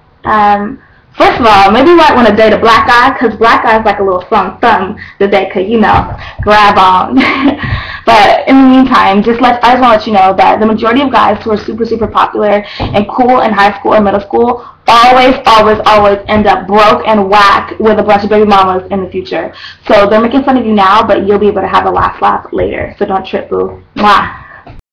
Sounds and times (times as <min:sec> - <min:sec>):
Speech: 0:00.3 - 0:24.7.